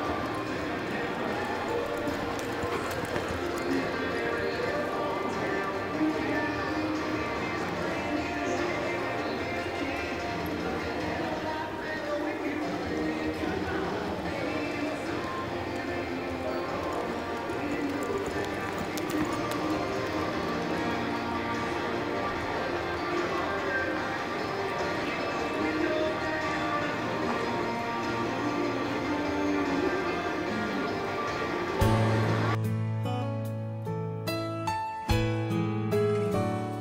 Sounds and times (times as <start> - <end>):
Clip-clop: 0.0 - 8.3, 9.1 - 32.2
Music: 0.0 - 36.8.